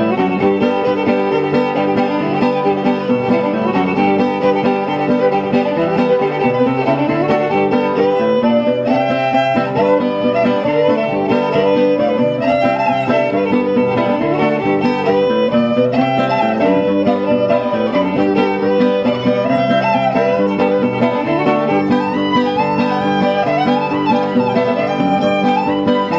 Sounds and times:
Violin, fiddle: 0.0s - 26.1s.

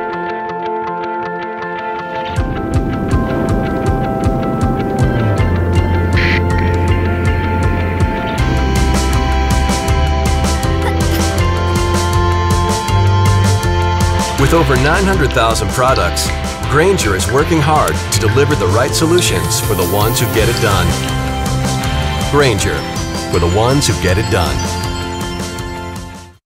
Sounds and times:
Music: 0.0s - 26.4s
Speech: 14.4s - 21.0s, 22.3s - 24.7s.

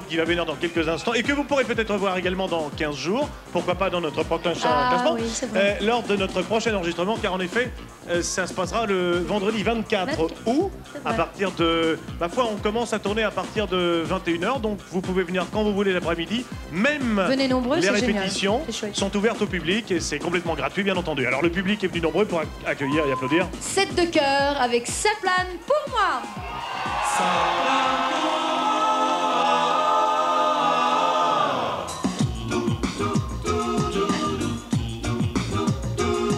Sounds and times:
Music: 0.0s - 36.3s
Speech: 0.1s - 26.2s.

